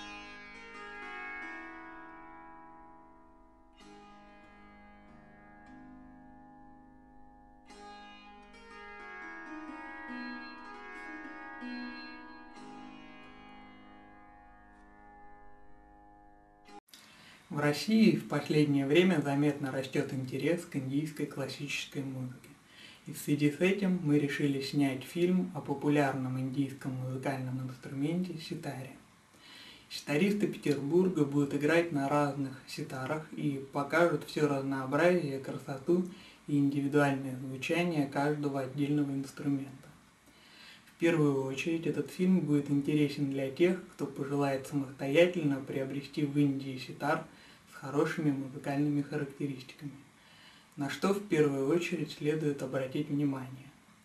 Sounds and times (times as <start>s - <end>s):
Speech: 17.5s - 29.0s, 29.9s - 40.0s, 41.0s - 50.0s, 50.8s - 53.8s.